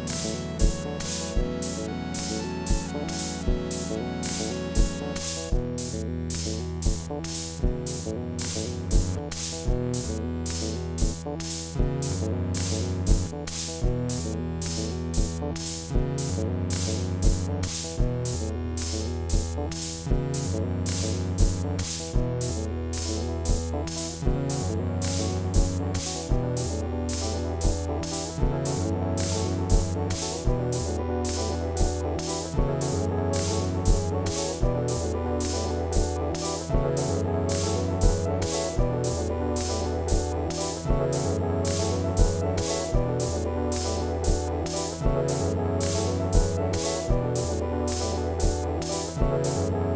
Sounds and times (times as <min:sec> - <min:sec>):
Synthesizer: 0:00.0 - 0:49.9.